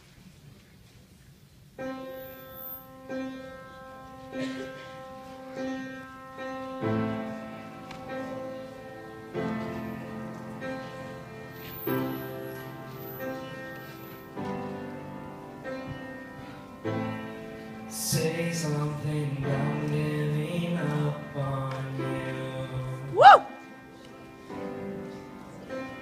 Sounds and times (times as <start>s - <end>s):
Vocal music: 17.9s - 23.7s
Singing: 18.0s - 23.6s.